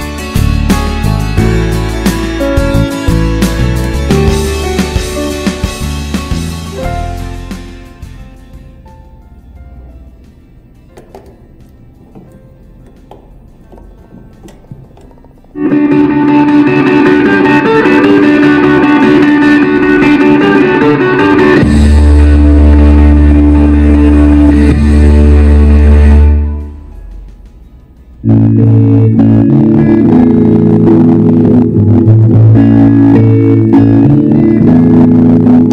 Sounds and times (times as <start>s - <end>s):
Music: 0.0s - 35.7s.